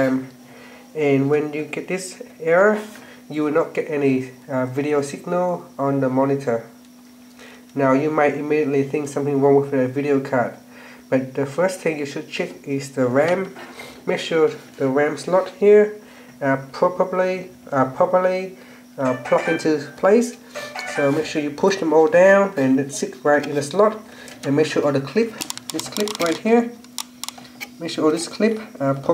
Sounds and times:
Speech: 0.0s - 0.4s, 1.0s - 6.8s, 7.8s - 20.4s, 21.0s - 26.8s, 27.8s - 29.1s.

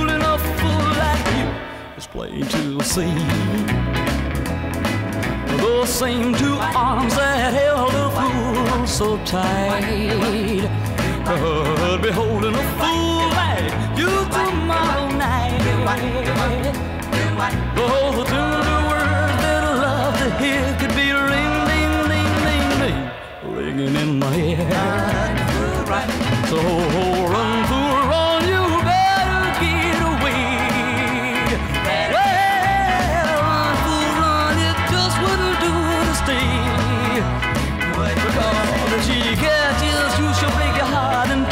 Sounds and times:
Music: 0.0s - 41.5s.

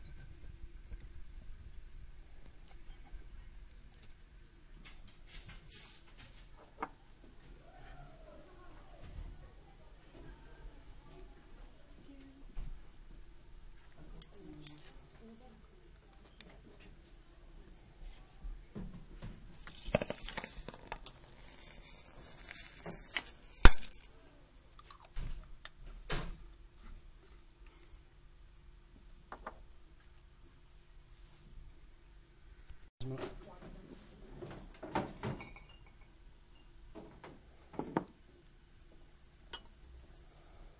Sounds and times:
Speech: 7.7s - 12.6s, 33.0s - 34.4s
Glass: 19.6s - 20.4s, 35.4s - 36.7s.

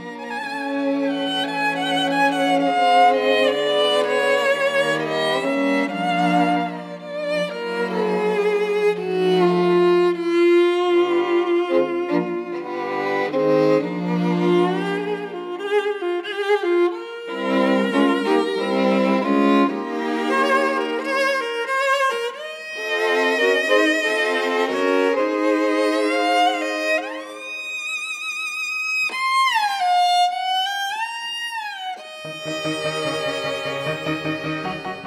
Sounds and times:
Cello: 0.0s - 35.0s
Violin, fiddle: 0.0s - 35.0s.

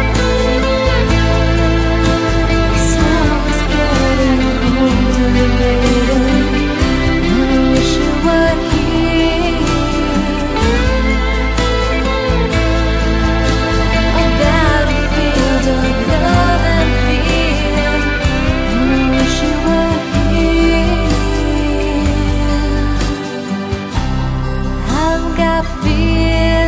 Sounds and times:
Music: 0.0s - 26.6s.

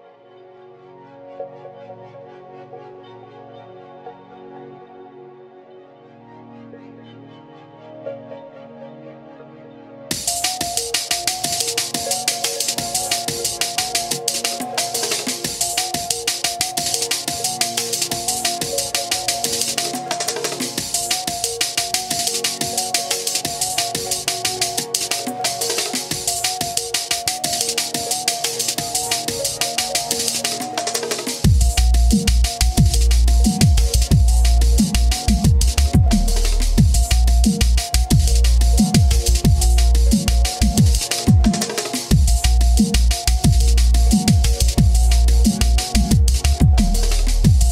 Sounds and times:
Disco: 10.1s - 47.7s.

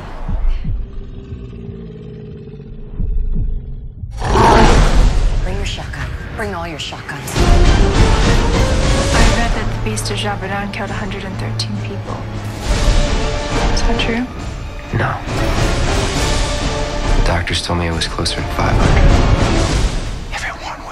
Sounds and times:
Music: 3.0s - 20.9s.

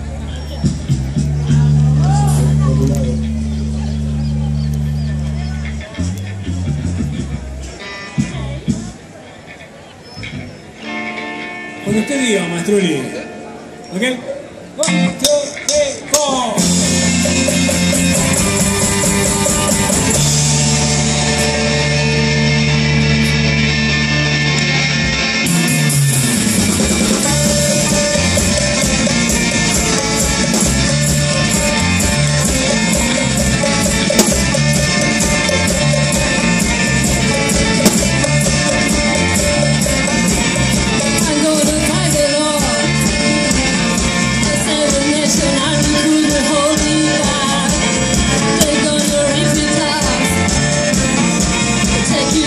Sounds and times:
Independent music: 0.0s - 9.6s, 14.6s - 52.4s.

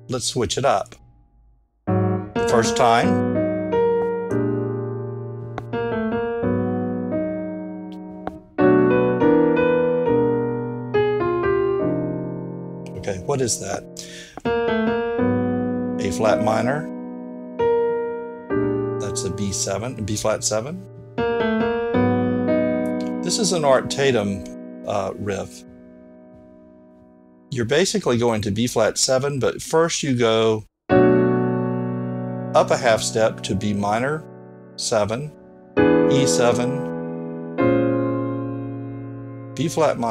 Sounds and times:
Classical music: 1.9s - 27.5s, 30.9s - 40.1s
Electric piano: 1.9s - 27.6s, 30.9s - 40.1s.

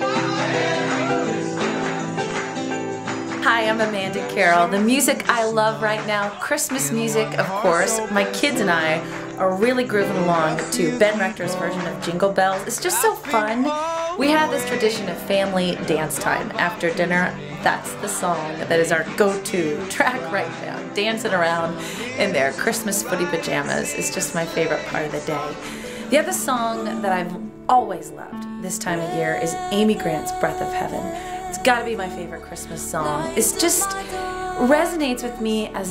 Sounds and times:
New-age music: 0.0s - 35.9s
Wedding music: 0.0s - 35.9s
Speech: 3.4s - 35.9s.

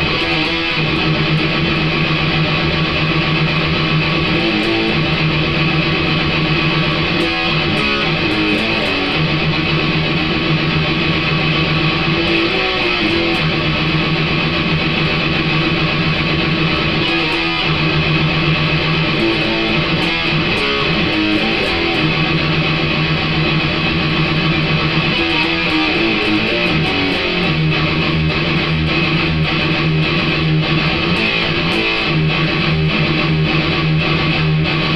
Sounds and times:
Electric guitar: 0.0s - 34.9s.

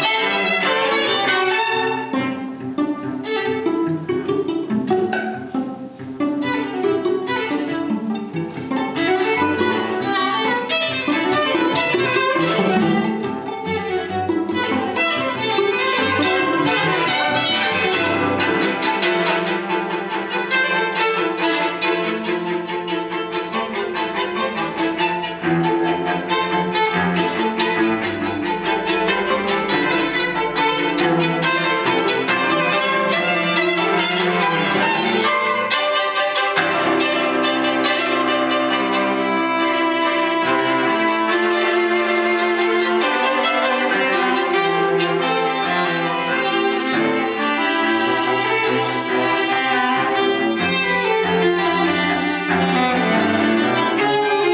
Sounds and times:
Cello: 0.0s - 54.5s
Classical music: 0.0s - 54.5s
Orchestra: 0.0s - 54.5s
Violin, fiddle: 0.0s - 54.5s.

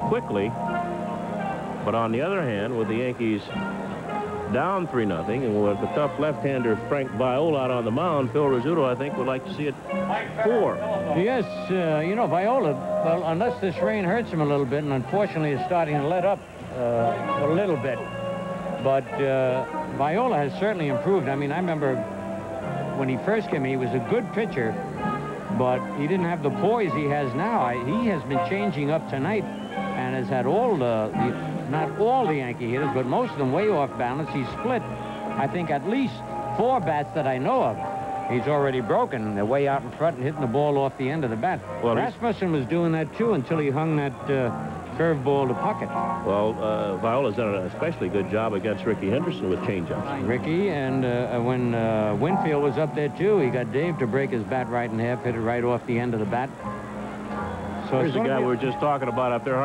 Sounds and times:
Music: 0.0s - 59.6s
Speech: 1.8s - 3.7s, 4.5s - 18.0s, 18.8s - 22.0s, 23.0s - 24.8s, 25.5s - 29.4s, 30.0s - 34.8s, 35.4s - 56.5s, 57.8s - 59.6s.

